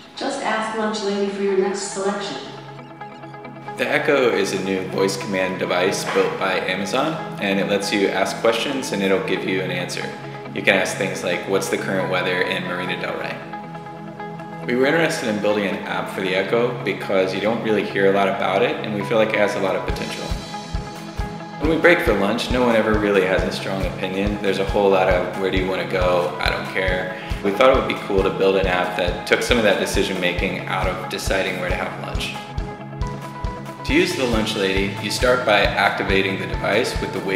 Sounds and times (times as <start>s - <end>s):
Music: 0.0s - 37.3s
Speech: 0.2s - 2.5s, 3.8s - 13.4s, 14.7s - 20.4s, 21.6s - 32.4s, 33.8s - 37.3s.